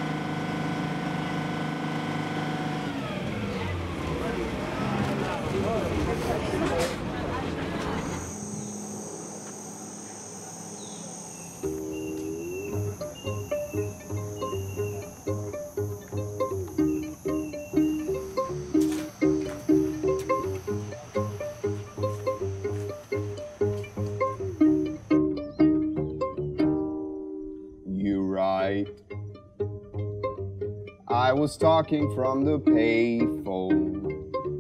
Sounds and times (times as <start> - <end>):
Music: 8.2 - 34.6.